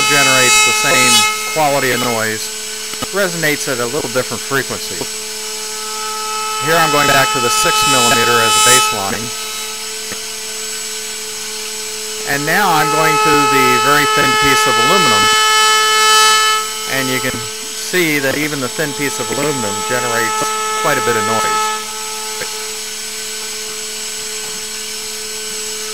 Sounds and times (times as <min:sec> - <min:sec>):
Speech: 0:00.0 - 0:05.1, 0:06.6 - 0:09.3, 0:12.3 - 0:15.4, 0:16.9 - 0:21.6.